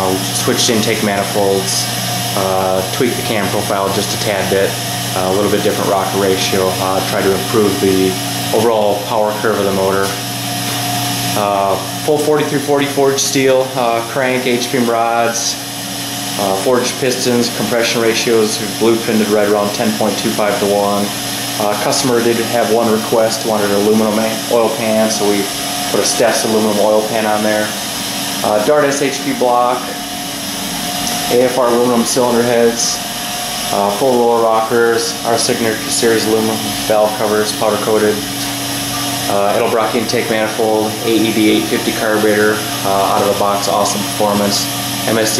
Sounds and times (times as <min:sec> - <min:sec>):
Speech: 0:00.0 - 0:10.2, 0:11.4 - 0:15.6, 0:16.4 - 0:27.8, 0:28.4 - 0:30.0, 0:31.3 - 0:33.0, 0:33.7 - 0:38.3, 0:39.3 - 0:45.3.